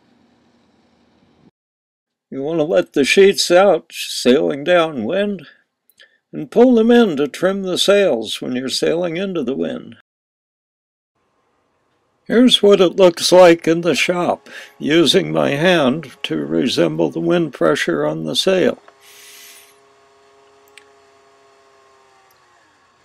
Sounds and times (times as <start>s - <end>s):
Speech: 2.4s - 5.6s, 6.4s - 10.0s, 12.3s - 18.8s.